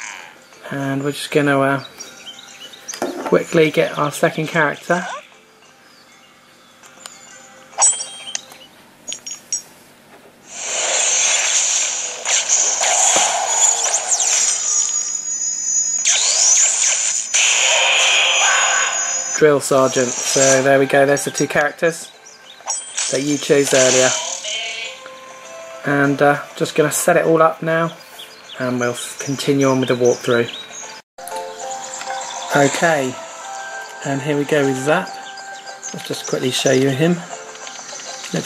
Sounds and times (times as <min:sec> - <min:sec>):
Music: 0:00.0 - 0:09.7, 0:19.0 - 0:38.4
Speech: 0:00.7 - 0:01.9, 0:03.3 - 0:05.2, 0:19.4 - 0:22.1, 0:23.1 - 0:24.4, 0:25.9 - 0:28.0, 0:28.6 - 0:30.6, 0:32.5 - 0:33.2, 0:34.0 - 0:35.1, 0:36.0 - 0:37.3.